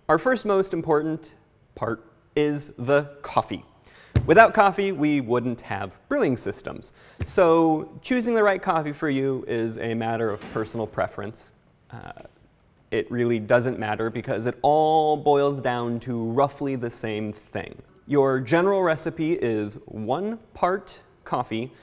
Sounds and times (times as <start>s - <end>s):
Speech: 0.0s - 21.8s.